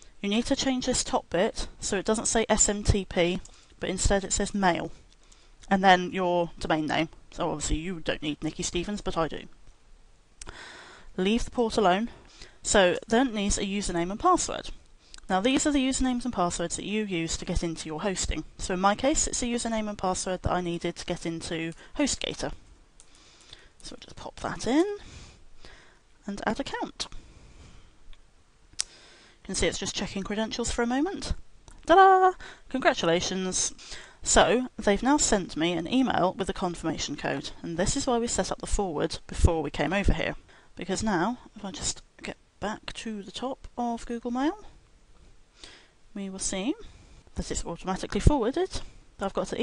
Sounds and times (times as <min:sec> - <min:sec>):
Speech: 0:00.2 - 0:05.0, 0:05.7 - 0:09.5, 0:11.2 - 0:22.6, 0:23.8 - 0:25.0, 0:26.2 - 0:27.1, 0:29.5 - 0:44.8, 0:46.2 - 0:49.6.